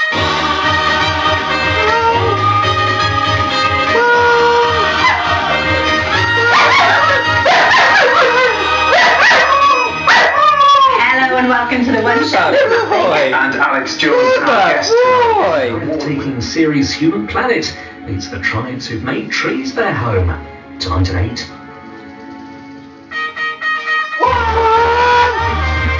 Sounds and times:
Music: 0.0 - 26.0
Bark: 6.5 - 10.4.

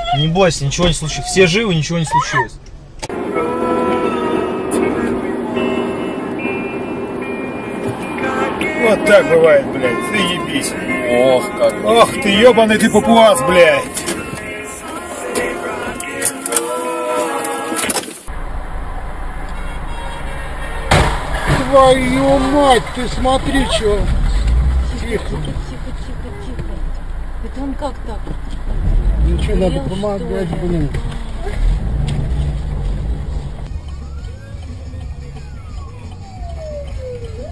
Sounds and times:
Car passing by: 18.3 - 27.4.

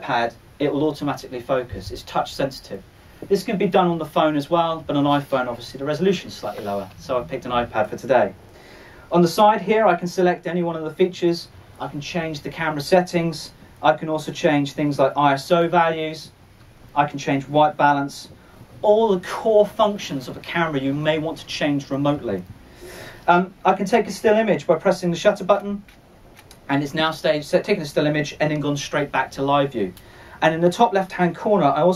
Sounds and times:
Speech: 0.0 - 8.4, 9.1 - 22.5, 23.3 - 25.9, 26.6 - 31.9.

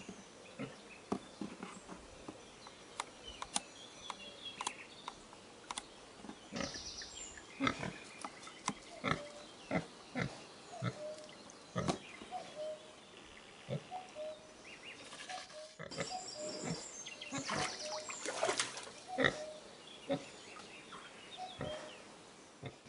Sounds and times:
Chirp, tweet: 0.0 - 22.1.

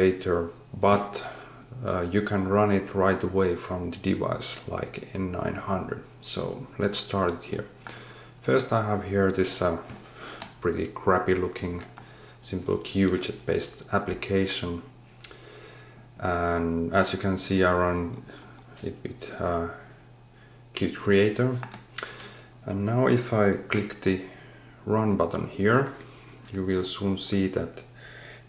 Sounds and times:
Speech: 0.0 - 7.8, 8.4 - 10.0, 10.6 - 14.9, 16.2 - 19.9, 20.7 - 21.7, 22.6 - 27.9.

